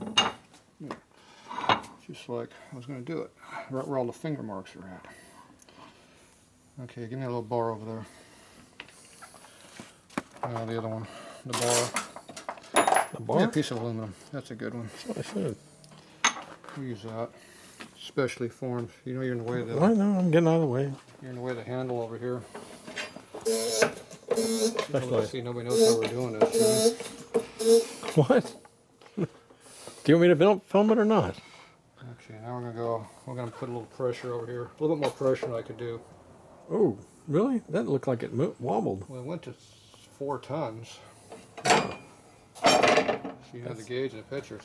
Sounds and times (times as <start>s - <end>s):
Speech: 2.0s - 5.0s, 6.8s - 8.1s, 10.5s - 12.0s, 13.2s - 15.6s, 16.7s - 17.3s, 18.0s - 22.5s, 24.9s - 26.8s, 30.1s - 31.4s, 32.0s - 36.0s, 36.7s - 41.0s, 43.5s - 44.6s.